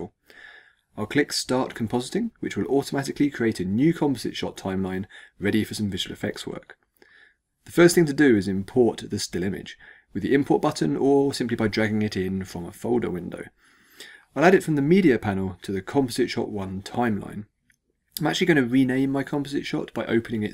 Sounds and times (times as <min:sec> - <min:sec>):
Speech: 0:01.0 - 0:06.8, 0:07.7 - 0:13.6, 0:14.4 - 0:17.5, 0:18.2 - 0:20.5.